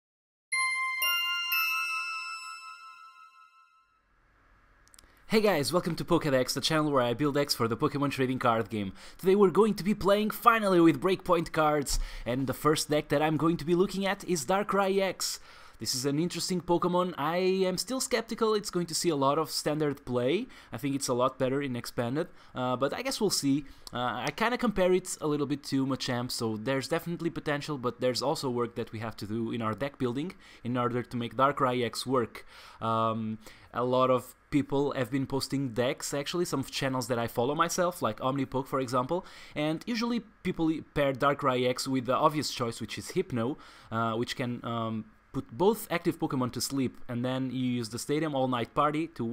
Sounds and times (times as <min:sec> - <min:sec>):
Music: 0:00.5 - 0:03.4
Speech: 0:05.3 - 0:49.3.